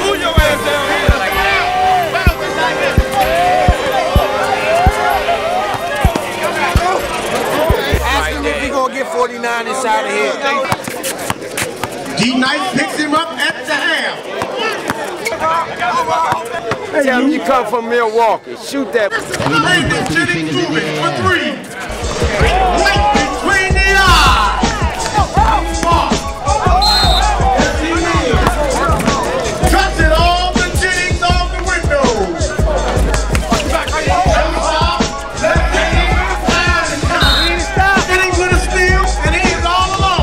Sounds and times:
Music: 0.0s - 8.7s, 21.9s - 40.2s
Outside, urban or manmade: 0.0s - 40.2s
Speech: 0.0s - 40.2s.

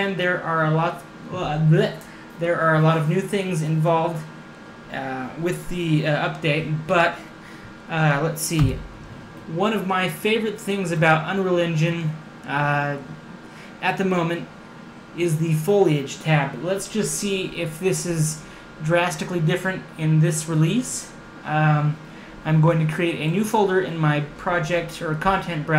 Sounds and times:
Speech: 0.0s - 4.3s, 4.9s - 7.3s, 7.9s - 8.9s, 9.5s - 13.2s, 13.8s - 14.5s, 15.2s - 25.7s.

